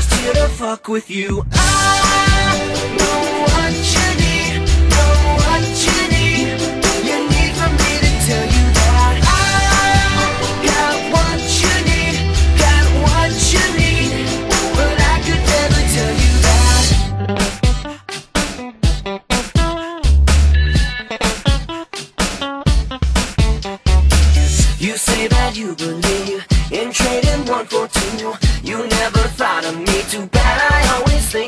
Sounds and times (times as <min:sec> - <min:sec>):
Music: 0:00.0 - 0:31.4.